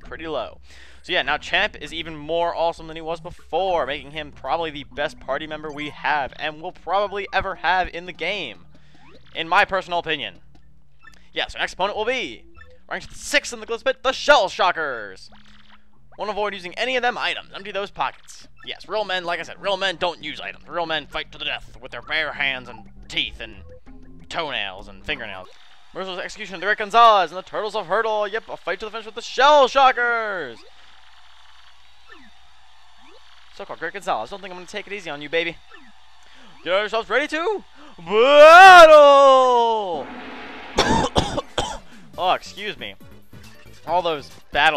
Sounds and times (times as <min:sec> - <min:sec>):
Speech: 0:00.0 - 0:08.6, 0:09.4 - 0:10.4, 0:11.4 - 0:15.3, 0:16.2 - 0:23.6, 0:24.3 - 0:30.6, 0:33.6 - 0:35.6, 0:36.6 - 0:40.1, 0:42.2 - 0:43.0, 0:43.8 - 0:44.7
Music: 0:00.0 - 0:27.8, 0:39.8 - 0:44.7.